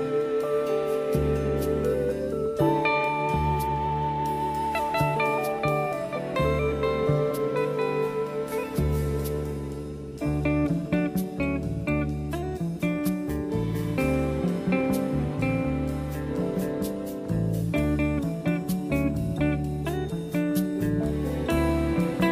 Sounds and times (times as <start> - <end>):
Steel guitar, slide guitar: 0.0 - 22.3.